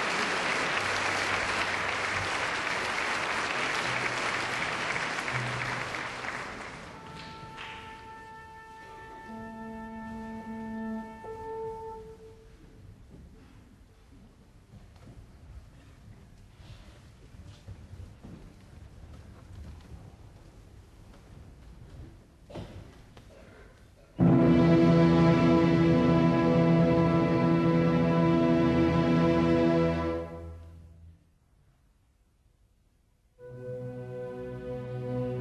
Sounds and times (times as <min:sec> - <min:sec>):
Music: 0:00.7 - 0:12.8, 0:24.2 - 0:31.3, 0:33.3 - 0:35.4.